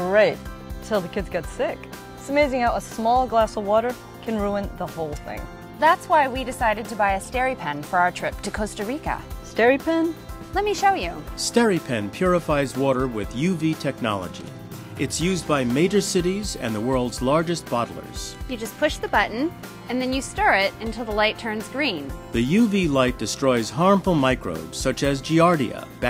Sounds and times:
Music: 0.0s - 26.0s
Speech: 0.0s - 26.0s.

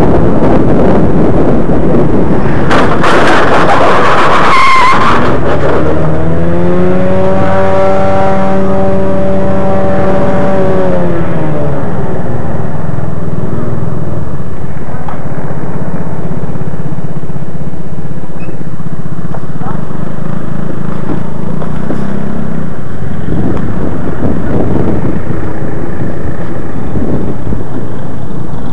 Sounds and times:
Field recording: 0.0s - 28.7s
Motorcycle: 0.0s - 28.7s.

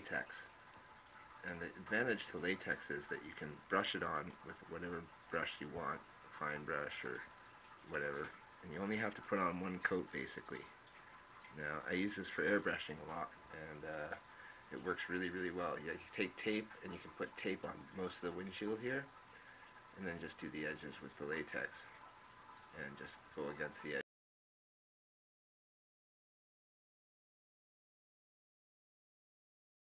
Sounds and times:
Speech: 0.0s - 0.5s, 1.4s - 7.3s, 7.9s - 10.7s, 11.6s - 19.1s, 20.0s - 21.9s, 22.8s - 24.1s.

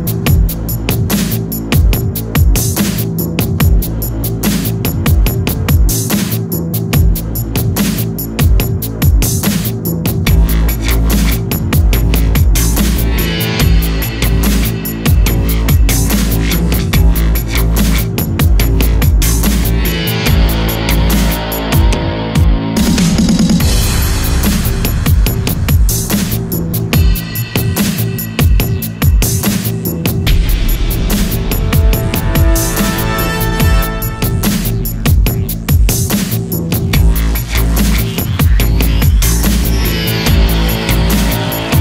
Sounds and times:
Music: 0.0s - 41.8s.

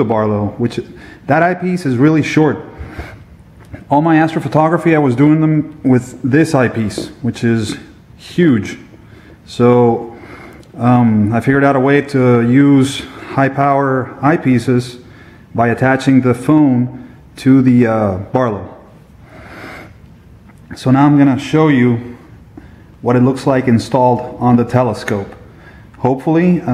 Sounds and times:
Speech: 0.0s - 2.8s, 3.8s - 8.9s, 9.5s - 10.2s, 10.8s - 18.9s, 20.7s - 22.2s, 23.0s - 25.4s, 26.0s - 26.7s.

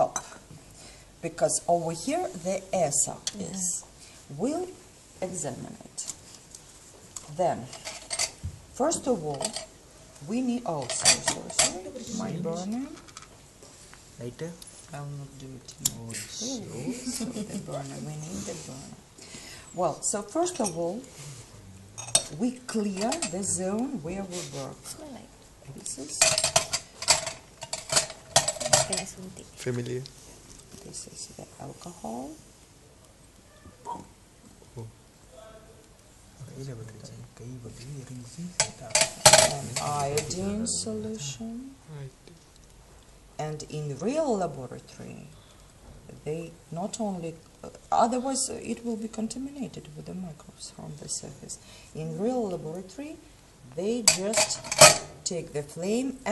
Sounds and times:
Speech: 11.8s - 12.9s, 29.6s - 30.1s, 36.4s - 38.9s, 39.5s - 42.1s.

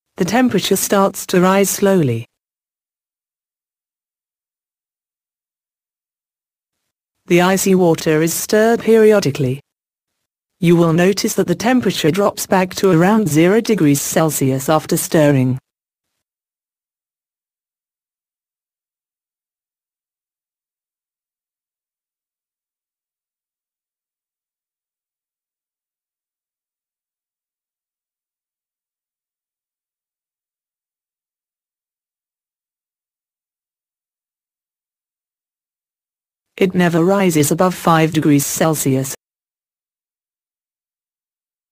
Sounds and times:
Speech: 0.2s - 2.3s, 7.3s - 9.6s, 10.6s - 15.6s, 36.6s - 39.2s.

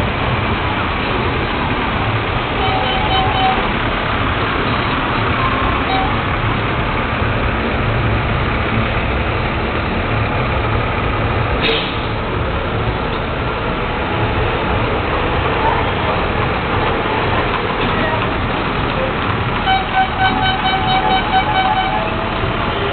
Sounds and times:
Outside, urban or manmade: 0.0s - 22.9s
Vehicle: 0.0s - 22.9s.

